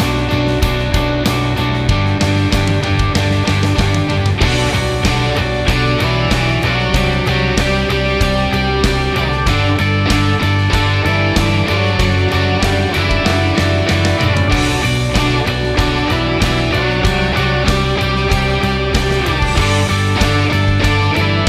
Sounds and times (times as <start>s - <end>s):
Music: 0.0s - 21.4s.